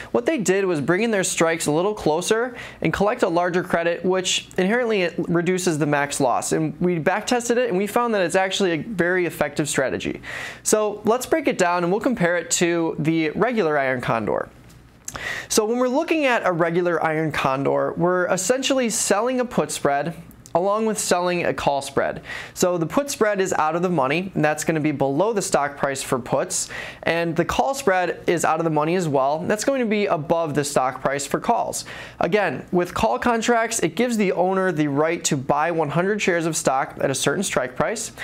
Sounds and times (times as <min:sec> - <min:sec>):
Speech: 0:00.1 - 0:14.6, 0:15.5 - 0:38.2.